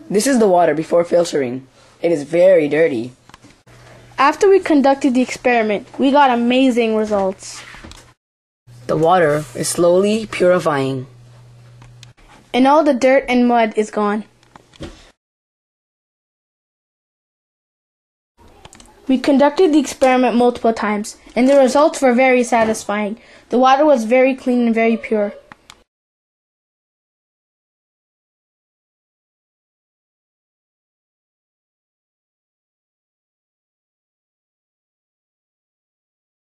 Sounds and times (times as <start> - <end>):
Speech: 0.0 - 3.2, 4.2 - 7.6, 8.9 - 11.1, 12.6 - 14.3, 18.6 - 25.4.